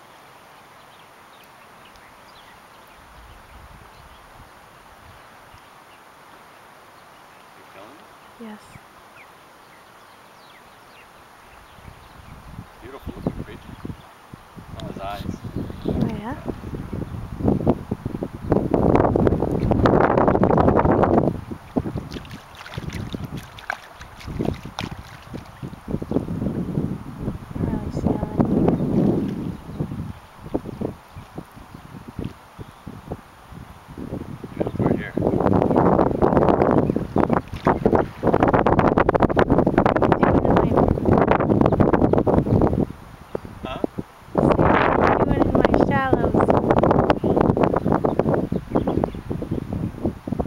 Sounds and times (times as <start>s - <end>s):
Speech: 7.6s - 8.8s, 14.8s - 16.5s, 27.6s - 28.4s, 34.6s - 35.2s, 45.2s - 46.5s.